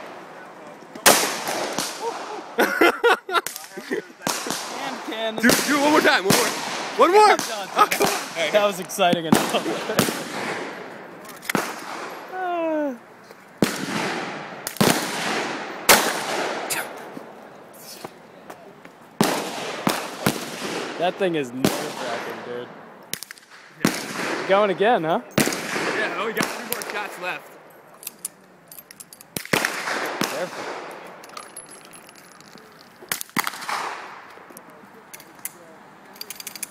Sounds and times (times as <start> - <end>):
Outside, urban or manmade: 0.0 - 36.7.